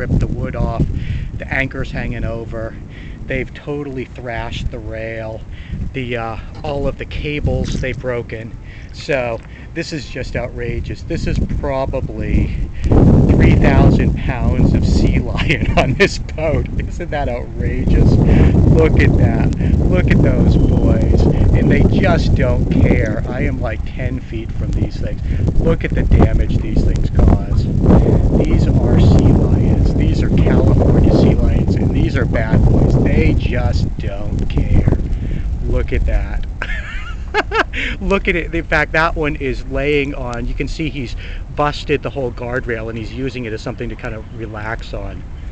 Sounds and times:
Speech: 0.0s - 12.7s, 13.3s - 35.0s, 35.6s - 36.6s, 37.7s - 45.2s.

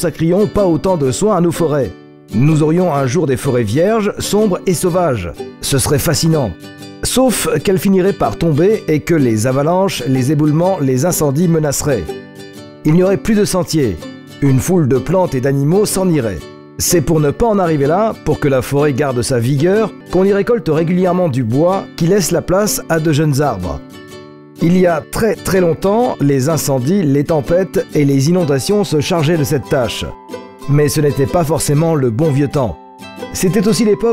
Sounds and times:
Speech: 0.0s - 12.1s, 12.8s - 23.8s, 24.6s - 34.1s
Music: 0.0s - 34.1s.

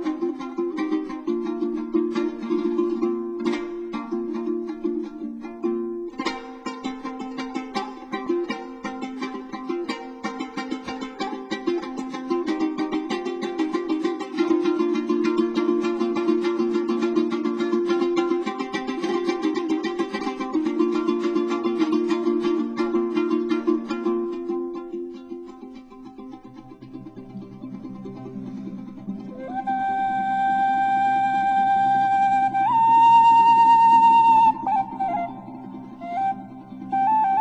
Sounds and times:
Mandolin: 0.0s - 37.4s.

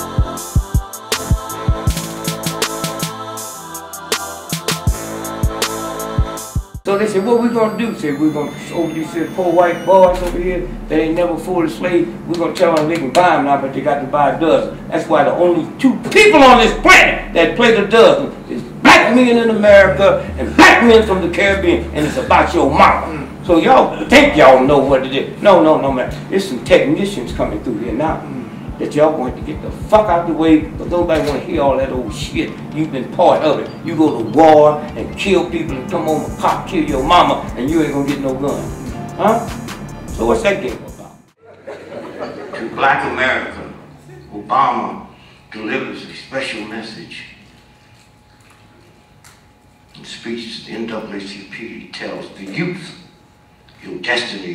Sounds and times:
Male speech, man speaking: 6.9s - 47.4s, 50.0s - 53.1s, 53.8s - 54.5s
Conversation: 7.2s - 39.4s, 41.3s - 47.2s, 49.2s - 54.5s.

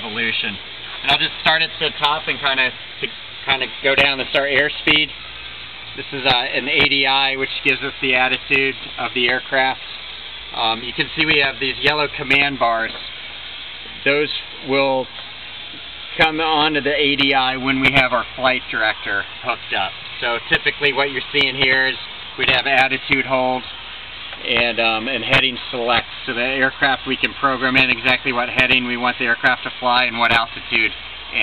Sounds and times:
Speech: 0.0s - 5.2s, 6.0s - 9.8s, 10.5s - 13.0s, 14.0s - 15.1s, 16.2s - 23.7s, 24.4s - 31.4s.

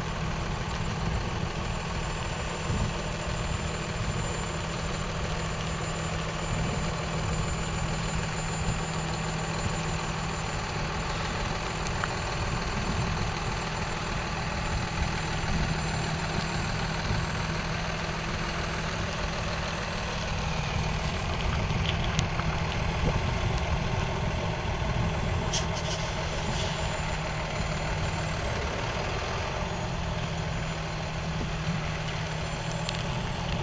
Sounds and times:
Truck: 0.0s - 33.6s.

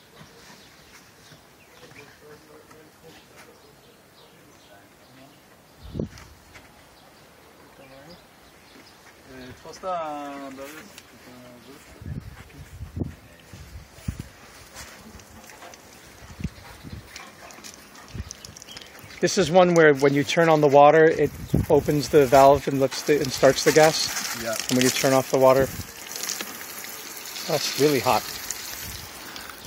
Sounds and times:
Outside, rural or natural: 0.0s - 29.6s
Speech: 1.7s - 5.4s, 9.3s - 13.6s, 19.2s - 25.8s, 27.4s - 28.2s.

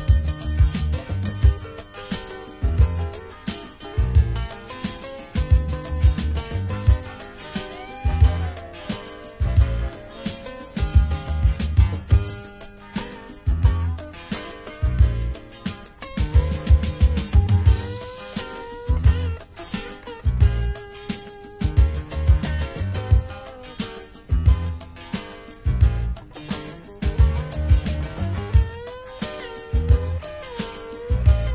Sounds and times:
Soul music: 0.0s - 31.5s.

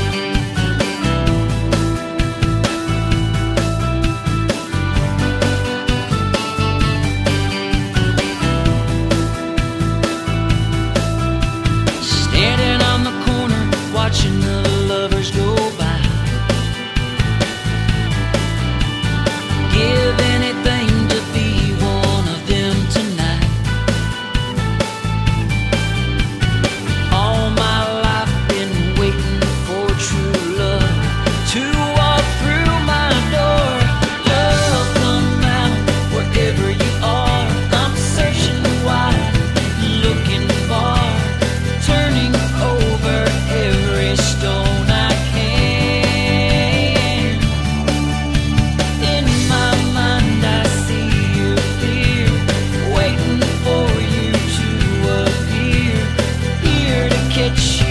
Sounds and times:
Country: 0.0s - 57.9s
Independent music: 0.0s - 57.9s
Pop music: 0.0s - 57.9s.

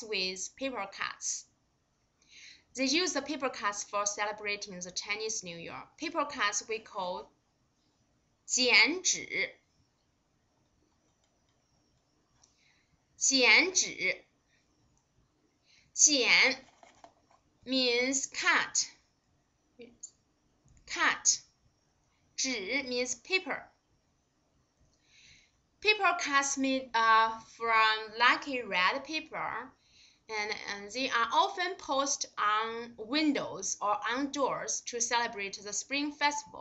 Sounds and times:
Speech: 0.0s - 1.5s, 2.8s - 7.3s, 8.5s - 9.6s, 13.2s - 14.2s, 16.0s - 16.6s, 17.7s - 19.0s, 20.9s - 21.5s, 22.4s - 23.7s, 25.8s - 29.7s, 30.3s - 36.6s.

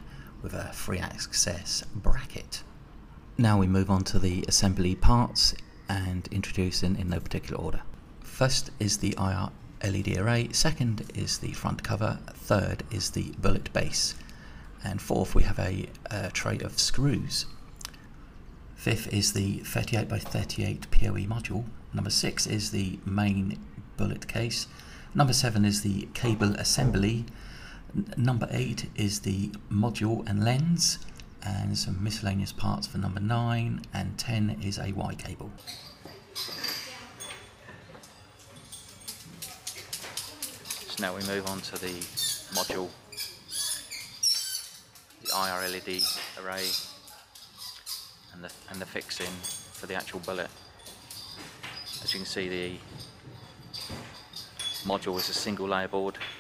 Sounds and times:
Speech: 0.4s - 2.7s, 3.4s - 14.2s, 14.8s - 17.5s, 18.8s - 27.3s, 28.0s - 35.6s, 40.5s - 43.0s, 45.2s - 46.9s, 48.3s - 50.5s, 52.0s - 52.9s, 54.8s - 56.3s.

